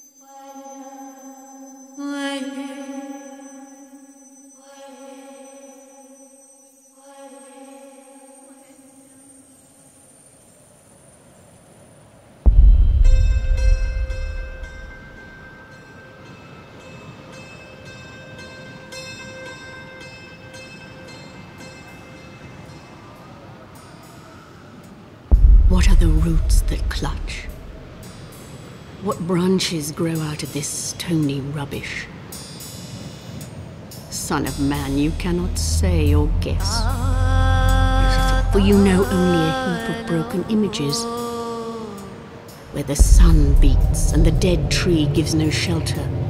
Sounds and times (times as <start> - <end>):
Music: 0.0 - 10.6, 12.5 - 46.2
Speech: 25.7 - 27.6, 29.0 - 32.1, 34.1 - 37.2, 37.8 - 41.4, 42.7 - 46.2.